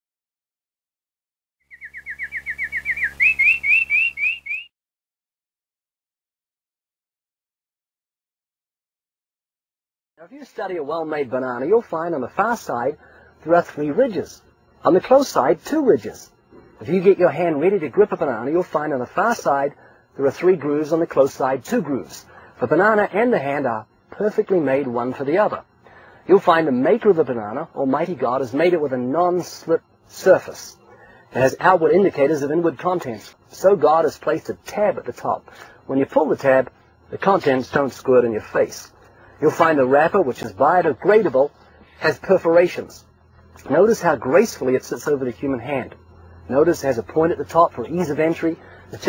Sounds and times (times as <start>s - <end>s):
Chirp, tweet: 1.7s - 4.7s.